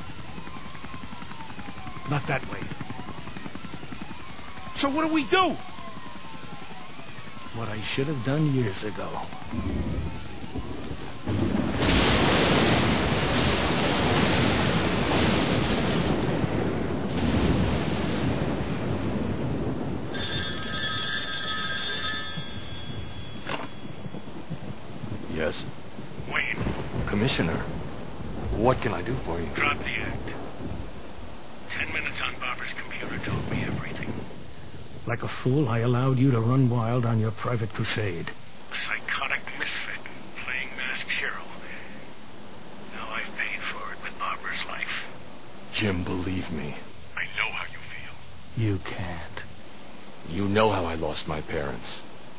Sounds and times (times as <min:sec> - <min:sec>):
Outside, urban or manmade: 0:00.0 - 0:52.3
Speech: 0:02.1 - 0:02.7, 0:04.8 - 0:05.6, 0:07.5 - 0:09.4, 0:26.3 - 0:27.7, 0:28.5 - 0:30.4, 0:31.7 - 0:34.2, 0:35.1 - 0:41.8, 0:42.9 - 0:45.1, 0:45.7 - 0:49.5, 0:50.3 - 0:52.0.